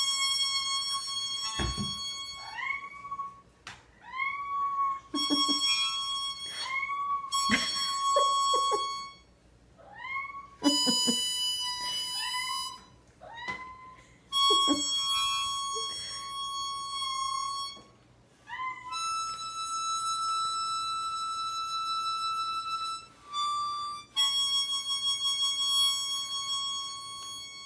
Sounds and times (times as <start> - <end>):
Harmonica: 0.0 - 3.2, 4.4 - 9.4, 10.6 - 13.0, 14.0 - 18.0, 18.9 - 27.6
Cat: 1.4 - 3.4, 4.0 - 7.5, 9.8 - 11.1, 12.0 - 14.1, 18.4 - 19.3.